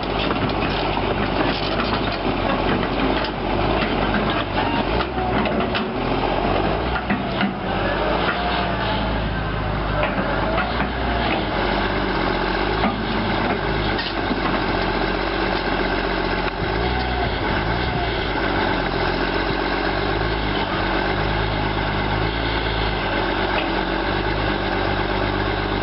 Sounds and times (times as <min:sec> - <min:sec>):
Outside, rural or natural: 0:00.0 - 0:25.8
Vehicle: 0:00.0 - 0:25.8.